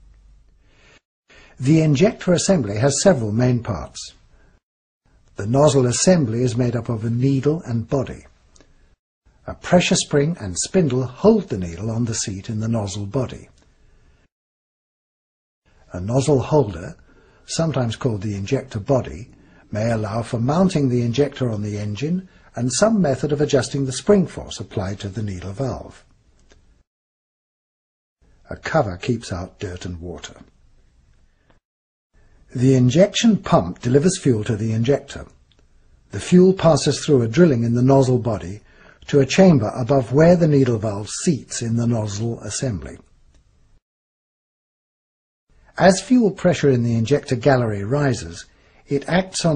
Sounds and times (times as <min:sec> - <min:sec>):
Speech: 0:01.6 - 0:04.2, 0:05.4 - 0:08.3, 0:09.4 - 0:13.6, 0:15.9 - 0:26.1, 0:28.5 - 0:30.5, 0:32.5 - 0:35.4, 0:36.1 - 0:43.1, 0:45.8 - 0:49.5.